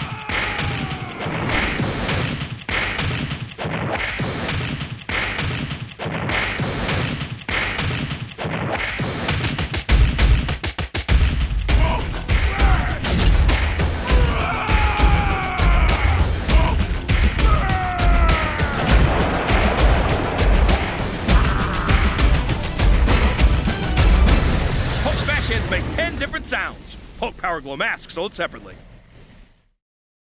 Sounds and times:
Music: 0:04.1 - 0:26.4
Speech: 0:25.0 - 0:28.8.

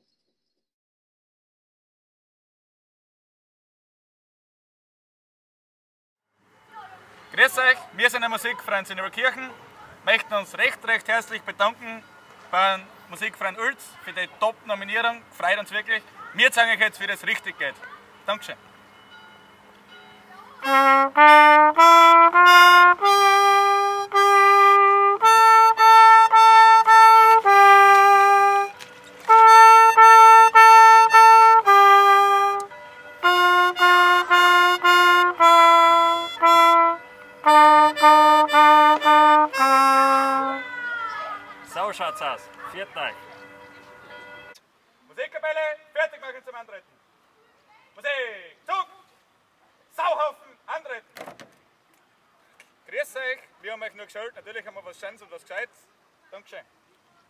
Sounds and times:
Music: 0:18.9 - 0:44.6
Stream: 0:25.4 - 0:57.3.

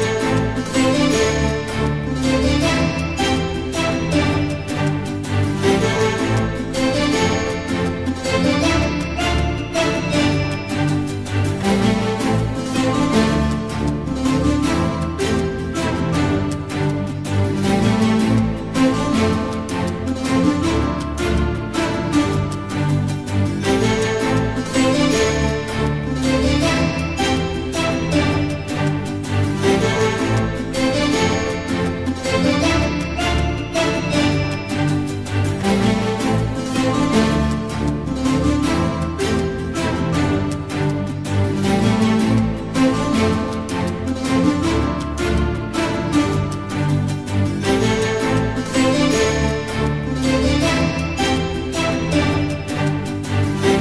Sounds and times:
Middle Eastern music: 0:00.0 - 0:53.8
Soundtrack music: 0:00.0 - 0:53.8
Theme music: 0:00.0 - 0:53.8.

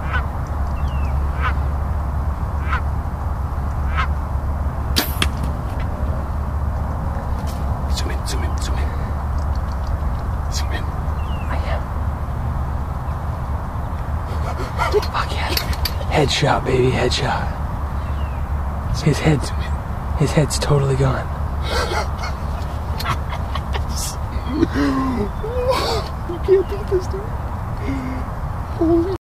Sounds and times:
Speech: 0:10.5 - 0:10.9, 0:14.5 - 0:17.6, 0:18.9 - 0:21.3, 0:25.4 - 0:29.2.

